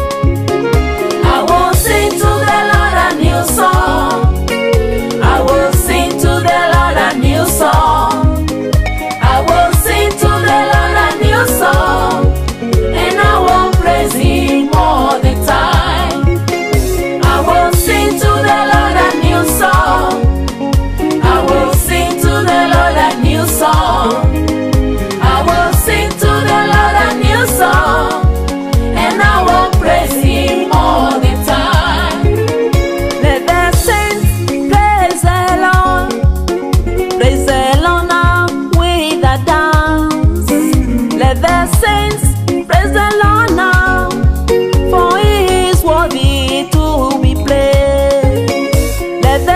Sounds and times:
Music: 0:00.0 - 0:49.5.

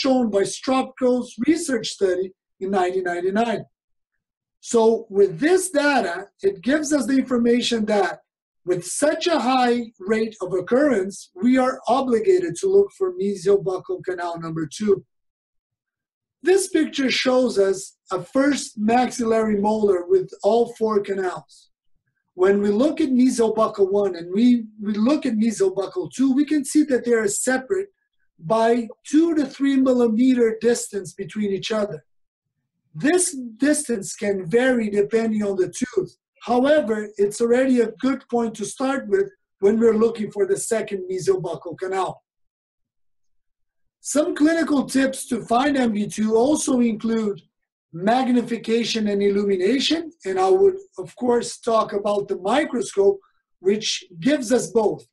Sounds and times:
Speech: 0:00.0 - 0:03.7, 0:04.6 - 0:15.1, 0:16.5 - 0:21.7, 0:22.4 - 0:32.0, 0:33.0 - 0:42.2, 0:44.0 - 0:55.1.

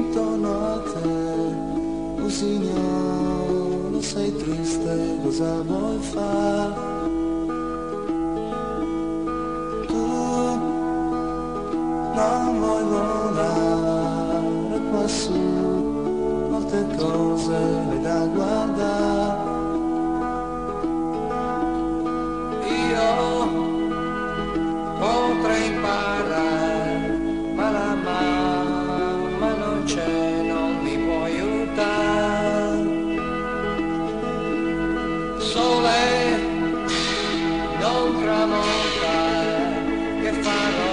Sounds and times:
Music: 0:00.0 - 0:40.9.

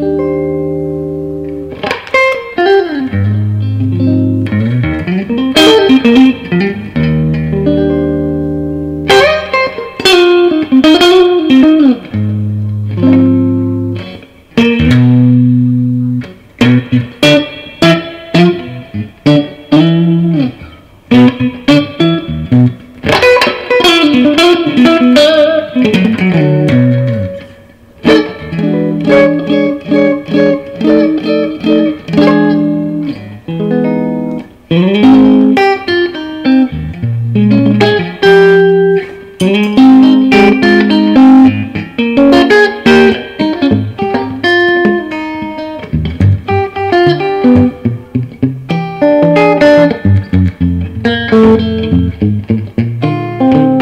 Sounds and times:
Music: 0:00.0 - 0:53.8.

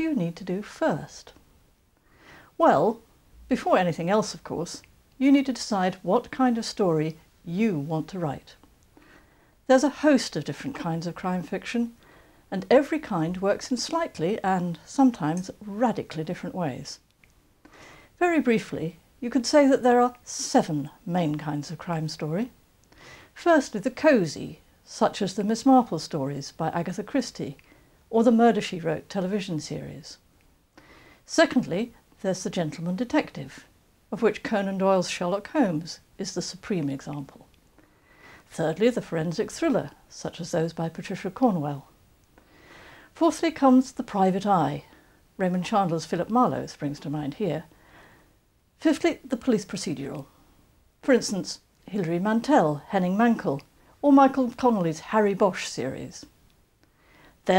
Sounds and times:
Speech: 0:00.0 - 0:01.4, 0:02.6 - 0:08.6, 0:09.7 - 0:17.0, 0:18.2 - 0:22.6, 0:23.4 - 0:30.2, 0:31.3 - 0:37.5, 0:38.5 - 0:42.0, 0:43.2 - 0:47.7, 0:48.8 - 0:50.3, 0:51.0 - 0:56.3.

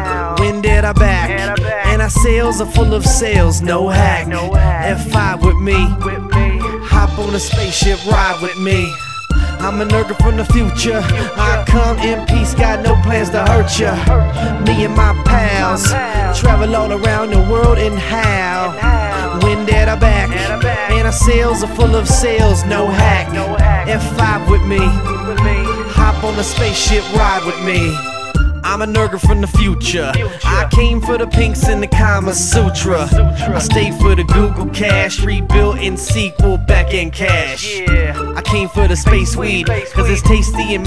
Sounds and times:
Music: 0:00.0 - 0:40.8.

